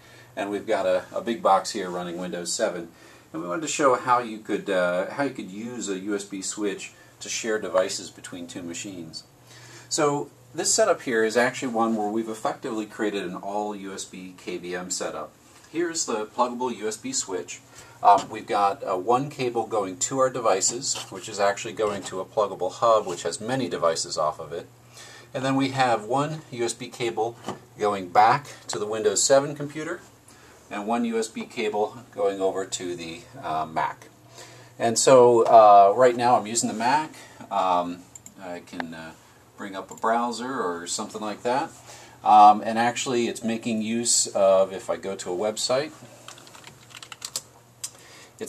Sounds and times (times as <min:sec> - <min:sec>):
Speech: 0:00.4 - 0:09.3, 0:09.9 - 0:24.7, 0:25.3 - 0:30.1, 0:30.7 - 0:34.1, 0:34.8 - 0:46.1.